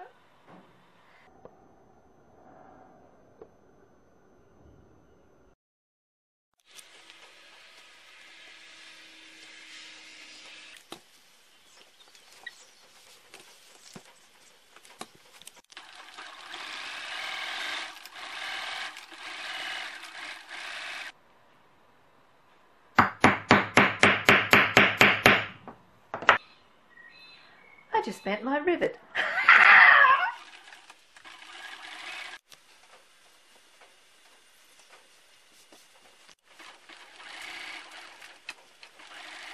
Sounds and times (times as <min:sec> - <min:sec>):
Sewing machine: 0:15.7 - 0:21.2, 0:30.3 - 0:32.4, 0:36.4 - 0:39.5
Speech: 0:27.9 - 0:29.0.